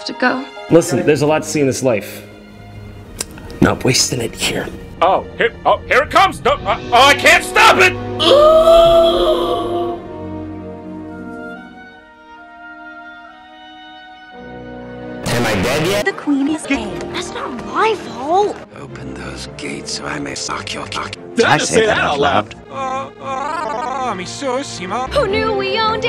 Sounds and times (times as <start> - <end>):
Music: 0.0 - 26.0.